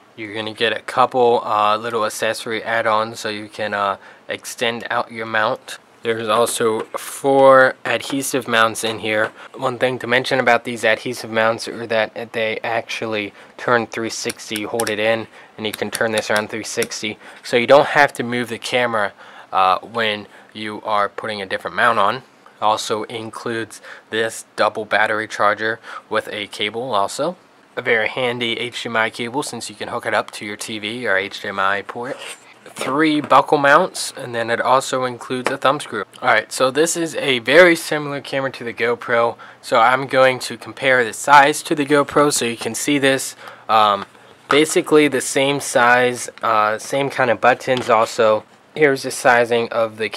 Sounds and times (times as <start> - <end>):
Speech: 0.2 - 50.1.